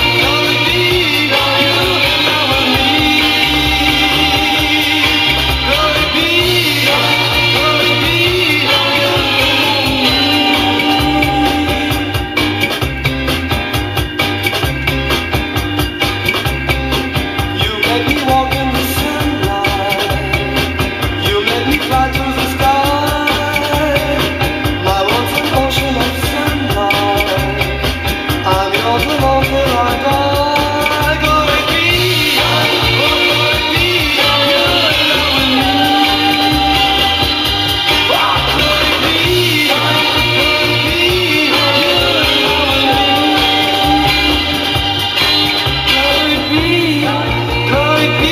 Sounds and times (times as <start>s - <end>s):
Psychedelic rock: 0.0s - 48.3s.